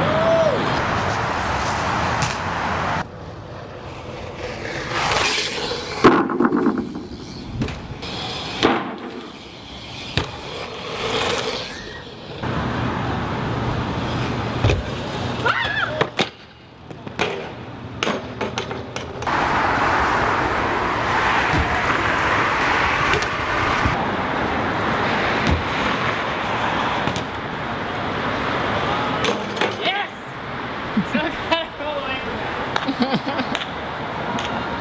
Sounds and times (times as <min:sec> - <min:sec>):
Bicycle: 0:00.0 - 0:30.2
Outside, urban or manmade: 0:00.0 - 0:34.8.